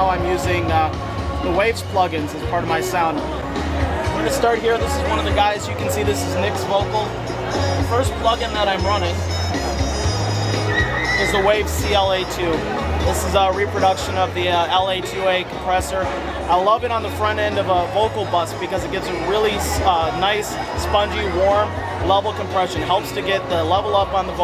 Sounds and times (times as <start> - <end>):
Speech: 0.0 - 3.3, 4.0 - 7.2, 7.8 - 9.2, 11.2 - 24.4
Music: 0.0 - 24.4.